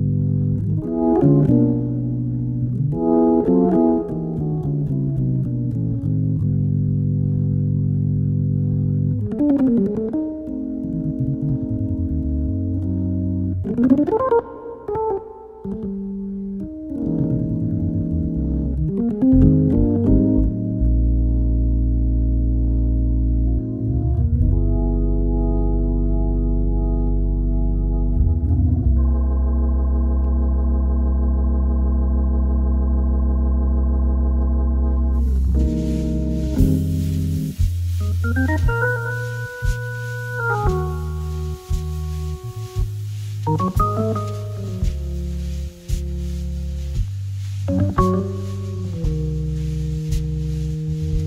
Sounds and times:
Music: 0.0 - 51.2.

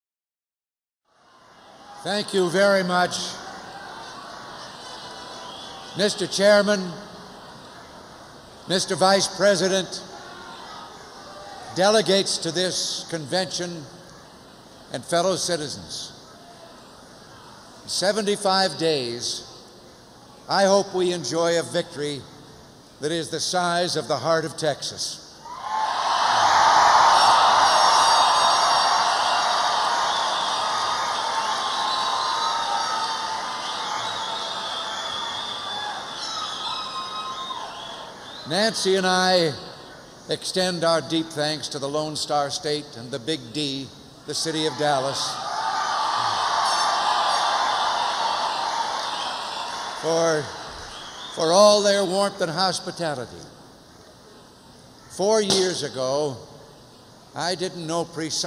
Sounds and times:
Male speech, man speaking: 2.0 - 3.4, 6.0 - 7.1, 8.7 - 10.0, 11.7 - 13.9, 14.9 - 16.2, 17.9 - 19.5, 20.5 - 22.3, 23.0 - 25.2, 38.5 - 39.7, 40.3 - 45.4, 50.0 - 50.5, 51.4 - 53.5, 55.1 - 56.5, 57.4 - 58.4.

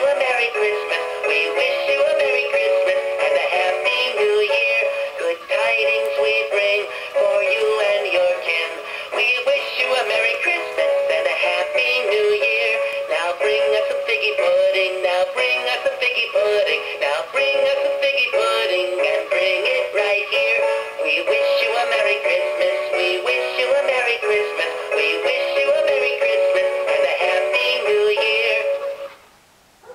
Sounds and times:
Synthetic singing: 0.0 - 29.1.

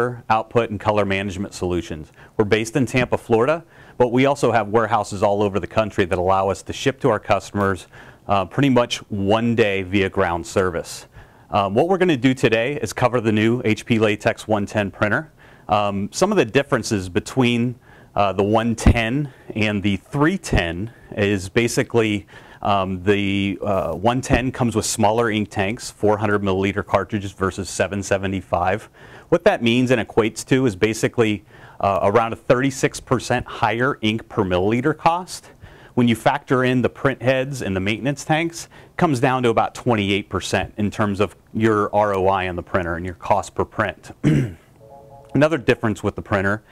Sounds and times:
Speech: 0.0 - 44.4, 45.4 - 46.7.

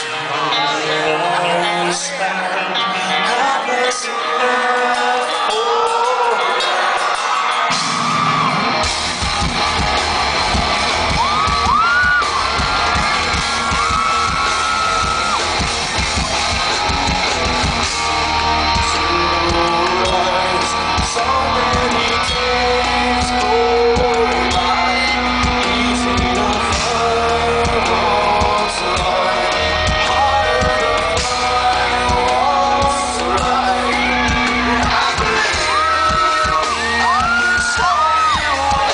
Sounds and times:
Music: 0.0 - 38.9.

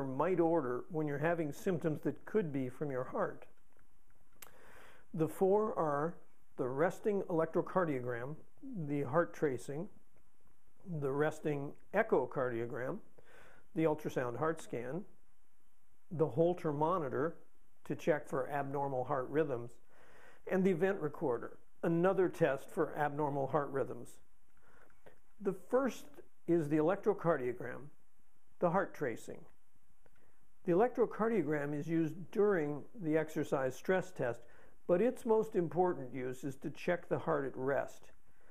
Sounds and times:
Speech: 0.0 - 3.6, 5.1 - 10.0, 10.8 - 13.1, 13.7 - 15.1, 16.1 - 19.8, 20.5 - 24.2, 25.4 - 28.0, 28.6 - 29.6, 30.6 - 38.2.

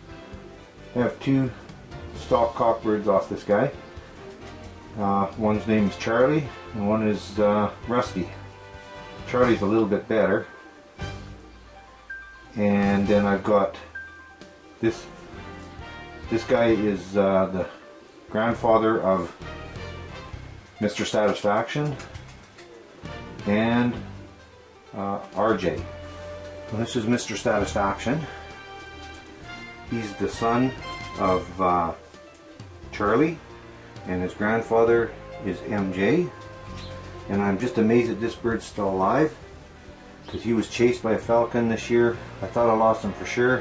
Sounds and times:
Music: 0.0 - 43.6
Speech: 0.9 - 1.6, 2.2 - 3.8, 4.9 - 8.4, 9.2 - 10.6, 12.5 - 13.9, 14.8 - 15.1, 16.3 - 19.4, 20.8 - 22.1, 23.4 - 24.1, 24.9 - 25.9, 26.7 - 28.4, 29.9 - 32.0, 32.9 - 33.4, 34.0 - 36.4, 37.3 - 39.4, 40.3 - 43.6.

